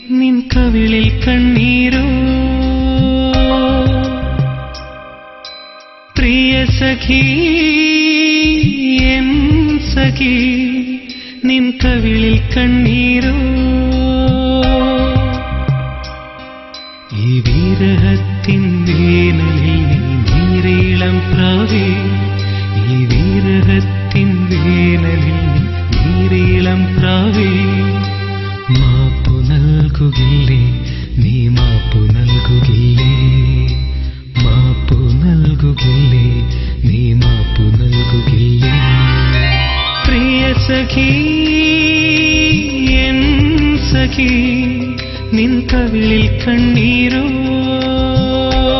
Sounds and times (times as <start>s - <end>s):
Sad music: 0.0s - 48.7s
Soundtrack music: 0.6s - 8.2s, 11.8s - 33.0s, 34.4s - 48.7s.